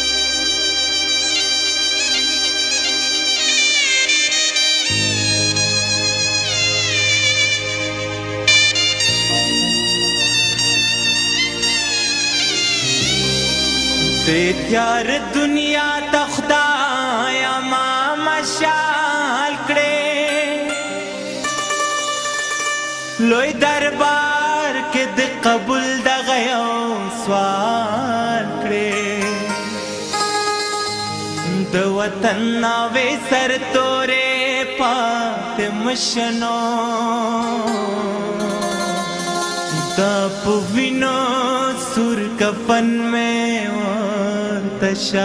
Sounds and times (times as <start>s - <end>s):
Independent music: 0.0s - 45.2s.